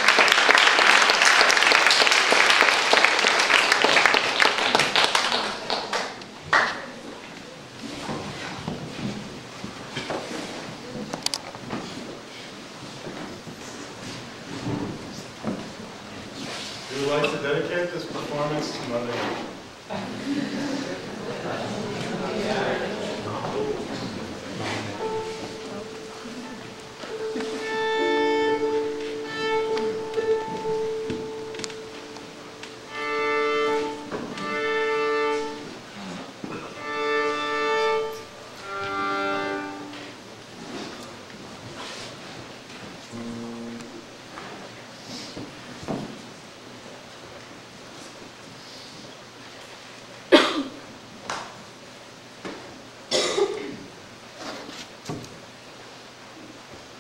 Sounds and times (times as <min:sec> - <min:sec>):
Speech: 0:16.9 - 0:19.5, 0:21.2 - 0:26.6
Music: 0:25.0 - 0:35.7, 0:36.8 - 0:40.1, 0:43.1 - 0:44.0.